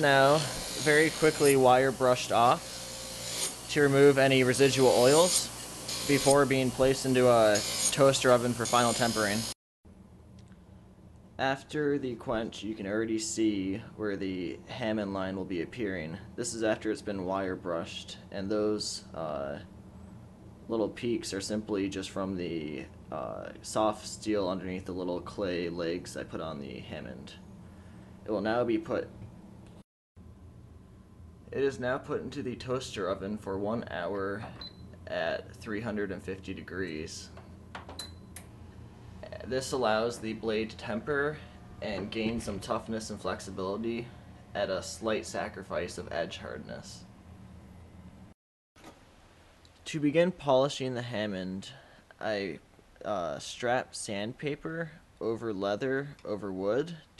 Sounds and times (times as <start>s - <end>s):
Speech: 0.0s - 2.6s, 3.7s - 5.5s, 6.1s - 9.5s, 11.4s - 19.7s, 20.7s - 27.4s, 28.3s - 29.1s, 31.5s - 37.4s, 39.2s - 47.1s, 49.8s - 57.1s.